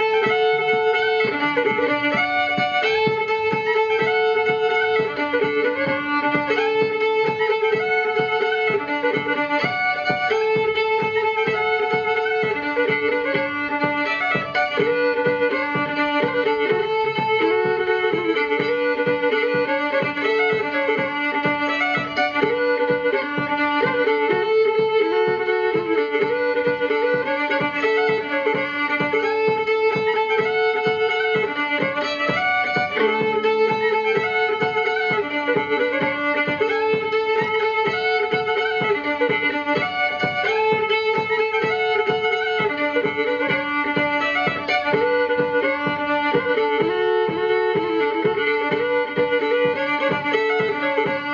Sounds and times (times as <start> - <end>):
Violin, fiddle: 0.0 - 51.3.